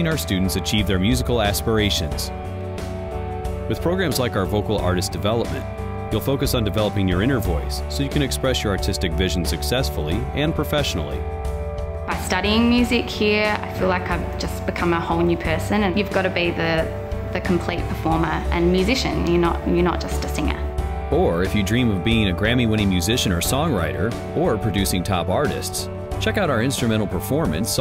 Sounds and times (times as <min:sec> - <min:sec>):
Speech: 0:00.0 - 0:02.3, 0:03.7 - 0:11.2, 0:12.1 - 0:27.8
Music: 0:00.0 - 0:27.8.